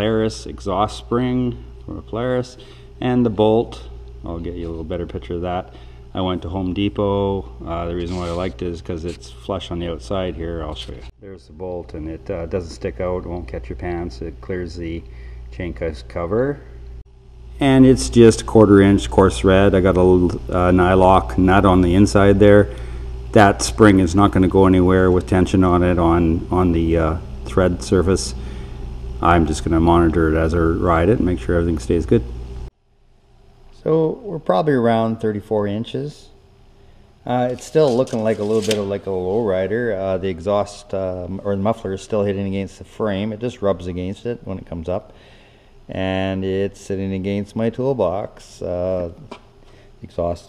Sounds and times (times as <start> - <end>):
Speech: 0.0 - 16.7, 17.6 - 28.4, 29.2 - 32.3, 33.8 - 36.4, 37.2 - 45.1, 45.9 - 49.4, 50.0 - 50.4.